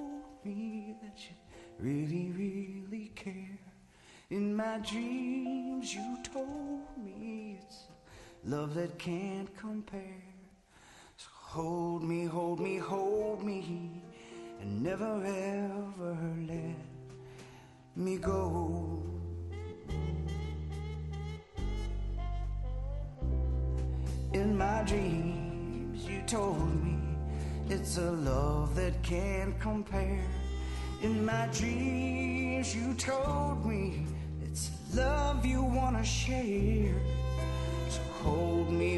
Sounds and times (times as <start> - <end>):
Male singing: 0.0 - 10.5, 11.2 - 17.0, 18.0 - 20.6, 24.3 - 38.9
Music: 0.0 - 38.9.